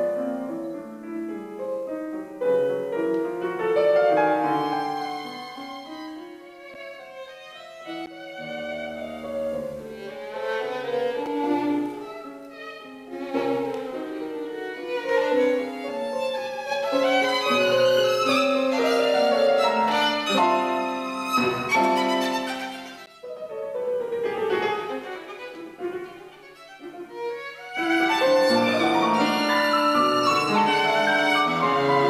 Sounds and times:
Violin, fiddle: 3.8s - 32.0s.

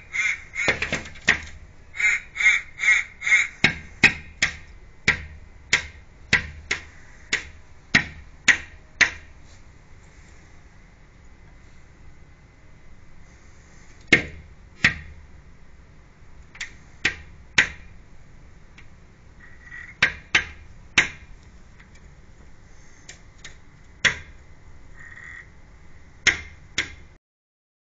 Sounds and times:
Caw: 0.1s - 1.0s, 2.0s - 3.8s, 19.4s - 20.0s, 25.0s - 25.5s.

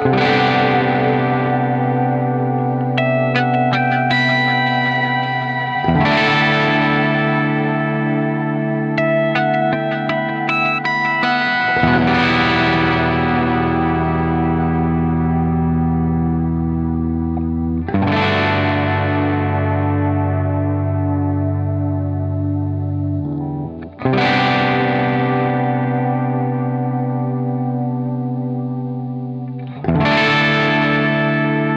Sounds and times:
Effects unit: 0.0s - 31.7s
Music: 0.0s - 31.7s.

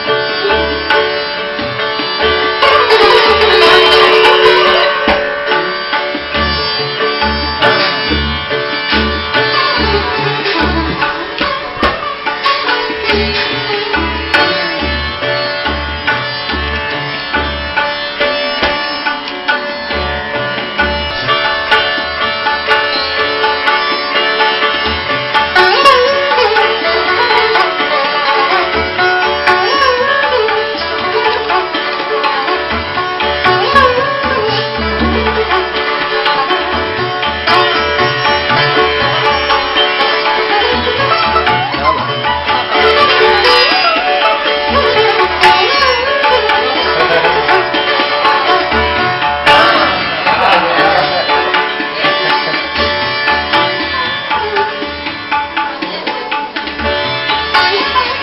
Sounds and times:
Sitar: 0.0s - 58.2s
Tabla: 0.0s - 58.2s
Classical music: 0.1s - 58.2s.

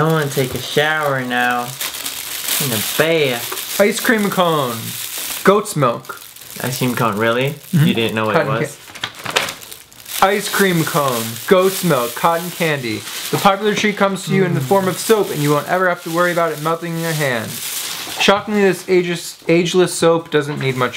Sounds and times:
Speech: 0.0s - 1.8s, 2.6s - 8.8s, 10.2s - 17.6s, 18.2s - 20.9s.

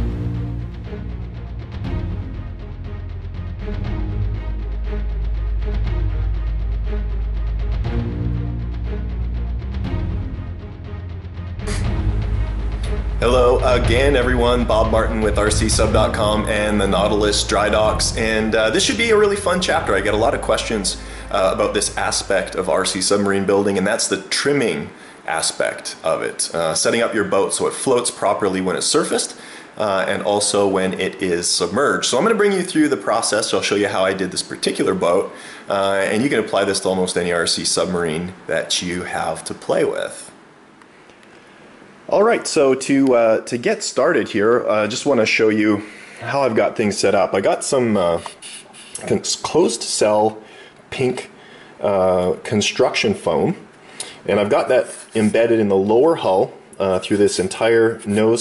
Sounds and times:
Speech: 13.2s - 40.4s, 42.1s - 58.4s.

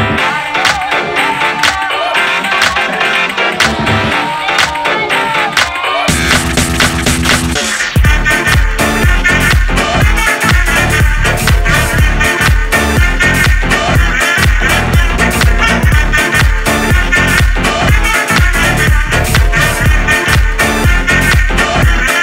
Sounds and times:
Disco: 0.0s - 22.2s.

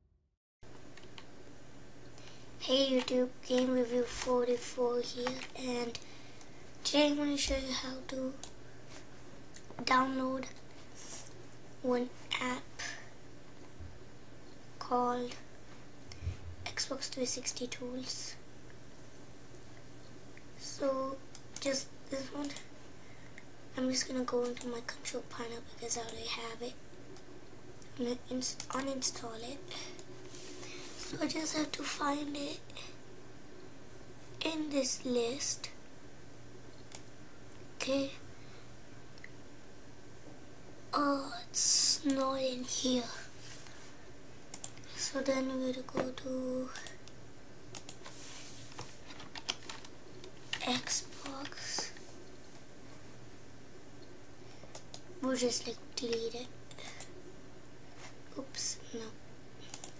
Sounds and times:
Speech: 2.6s - 6.0s, 6.8s - 8.4s, 9.8s - 10.6s, 11.8s - 13.0s, 14.8s - 15.5s, 16.7s - 18.4s, 20.6s - 22.7s, 23.8s - 26.8s, 28.0s - 29.9s, 31.1s - 32.9s, 34.4s - 35.8s, 37.8s - 38.2s, 41.0s - 43.3s, 45.0s - 46.9s, 50.6s - 51.9s, 55.2s - 56.5s, 58.3s - 59.2s.

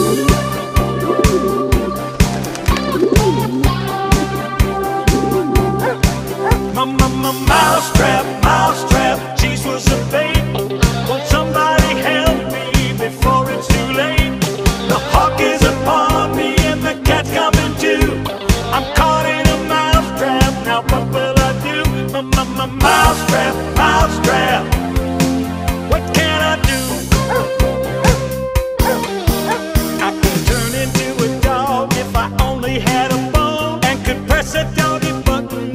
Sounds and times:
Music: 0.0s - 35.7s.

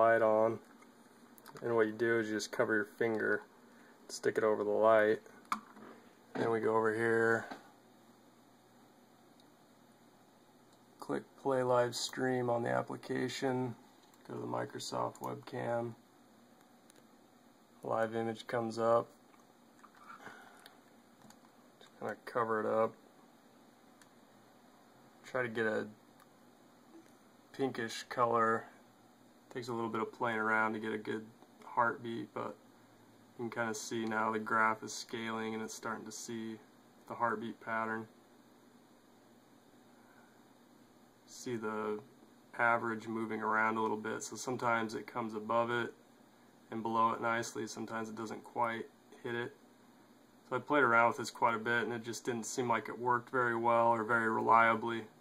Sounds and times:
Speech: 0.0s - 0.6s, 1.5s - 3.5s, 4.1s - 5.3s, 6.3s - 7.6s, 11.0s - 16.0s, 17.8s - 19.1s, 22.0s - 23.0s, 25.2s - 26.0s, 27.5s - 28.8s, 29.5s - 32.6s, 33.4s - 38.1s, 41.3s - 46.0s, 46.7s - 49.6s, 50.5s - 55.1s.

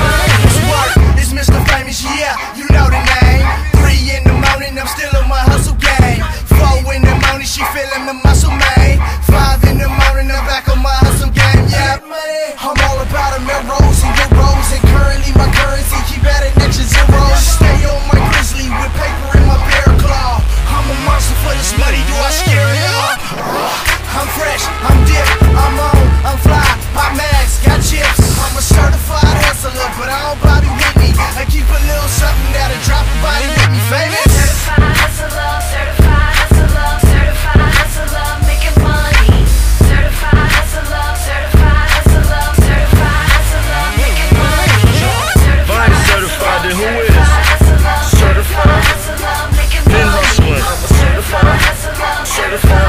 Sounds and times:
Music: 0.0s - 52.8s.

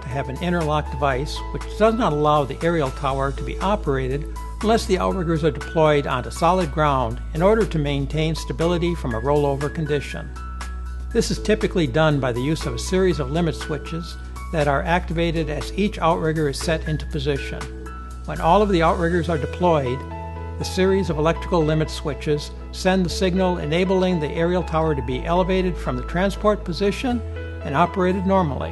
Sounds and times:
Speech: 0.0s - 10.3s, 11.2s - 17.7s, 18.3s - 20.0s, 20.6s - 28.7s
Music: 0.0s - 28.7s.

